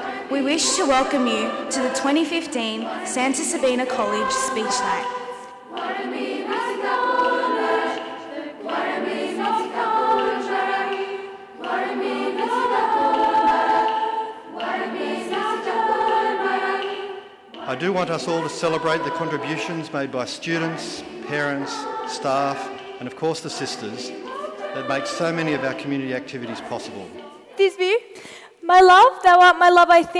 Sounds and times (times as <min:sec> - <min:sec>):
Music: 0:00.0 - 0:30.1
Narration, monologue: 0:00.3 - 0:05.6, 0:17.5 - 0:30.1
Male speech, man speaking: 0:17.7 - 0:24.2, 0:24.8 - 0:27.2.